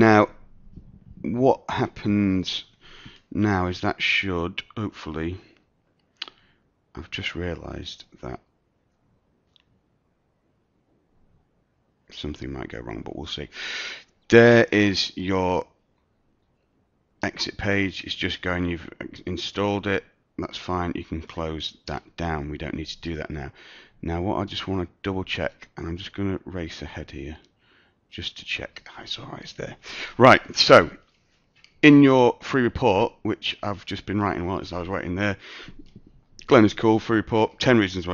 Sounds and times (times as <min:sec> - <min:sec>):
Speech: 0:00.0 - 0:00.4, 0:01.2 - 0:02.7, 0:03.3 - 0:05.6, 0:07.0 - 0:08.5, 0:12.1 - 0:13.6, 0:14.3 - 0:15.8, 0:17.2 - 0:27.5, 0:28.1 - 0:31.0, 0:31.8 - 0:35.4, 0:36.4 - 0:38.1.